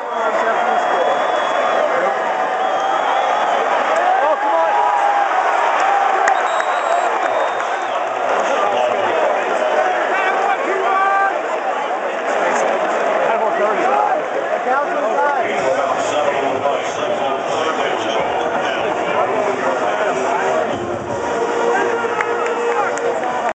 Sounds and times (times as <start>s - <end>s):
Speech: 0.0s - 2.2s, 8.3s - 23.5s
Music: 18.2s - 23.5s.